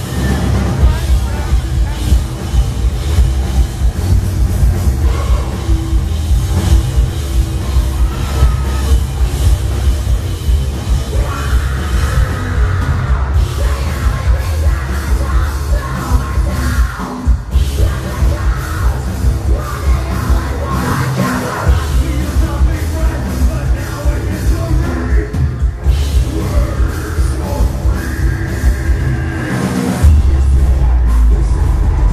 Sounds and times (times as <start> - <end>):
Music: 0.0 - 32.1
Singing: 4.8 - 10.2, 10.8 - 32.1.